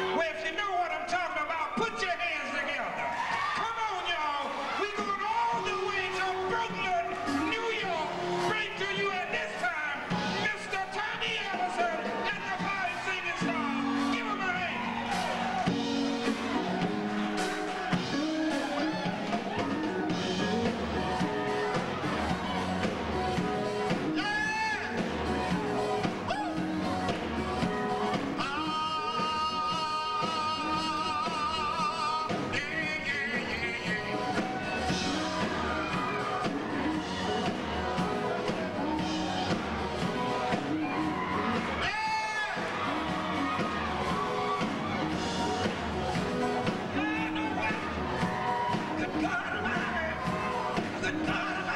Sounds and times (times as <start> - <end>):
Music: 0.0 - 51.7
Speech: 0.1 - 14.8.